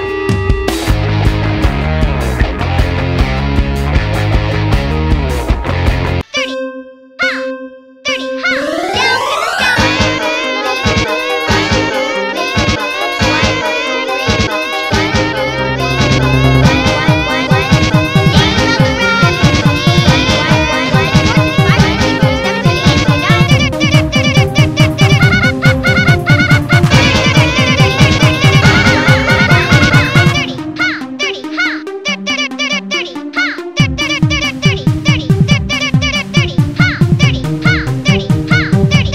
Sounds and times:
Electronic music: 0:00.0 - 0:39.1.

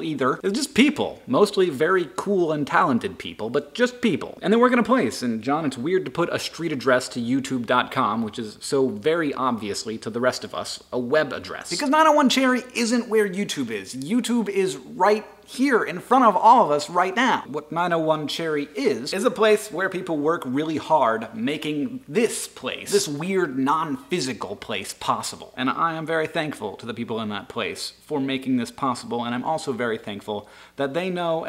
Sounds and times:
Speech: 0:00.0 - 0:31.4.

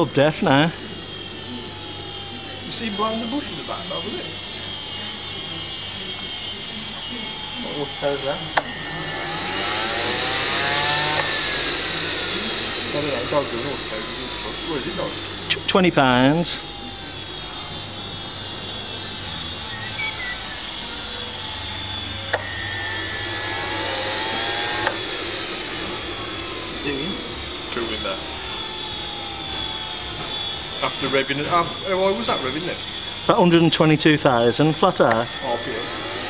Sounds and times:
Speech: 0:12.9 - 0:16.7, 0:30.8 - 0:35.9.

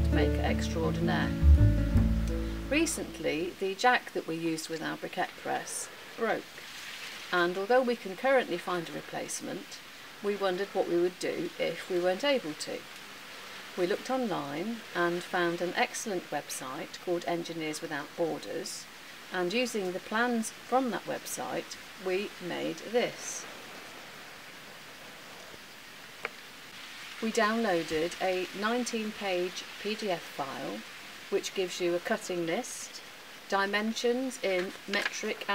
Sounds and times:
Speech: 0:00.0 - 0:01.4, 0:02.7 - 0:06.5, 0:07.4 - 0:12.9, 0:13.8 - 0:23.5, 0:27.2 - 0:35.5.

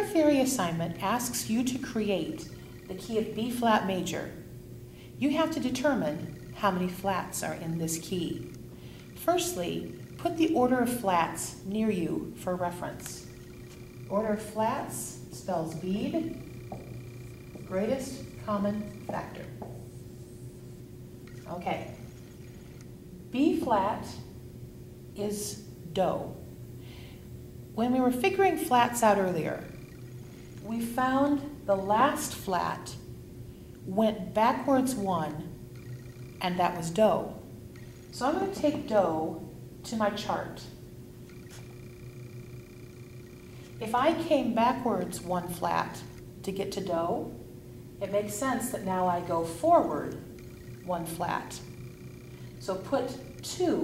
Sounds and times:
Speech: 0:00.0 - 0:04.4, 0:05.2 - 0:08.5, 0:09.2 - 0:13.3, 0:14.1 - 0:16.4, 0:17.7 - 0:19.6, 0:21.5 - 0:22.0, 0:23.4 - 0:24.3, 0:25.2 - 0:26.4, 0:27.8 - 0:29.7, 0:30.7 - 0:33.0, 0:33.9 - 0:35.5, 0:36.4 - 0:37.4, 0:38.2 - 0:40.8, 0:43.8 - 0:47.4, 0:48.0 - 0:50.3, 0:50.9 - 0:51.7, 0:52.6 - 0:53.8.

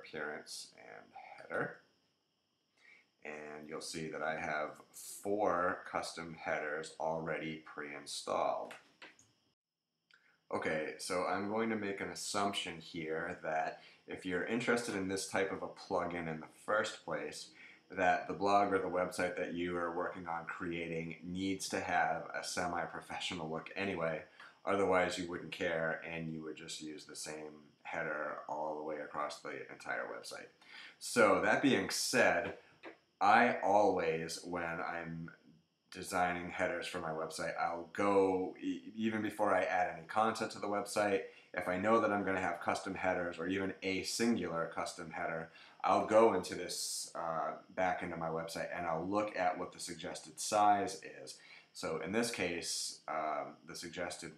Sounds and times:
Speech: 0:00.0 - 0:01.7, 0:03.3 - 0:08.8, 0:10.5 - 0:32.6, 0:33.2 - 0:35.3, 0:36.0 - 0:54.3.

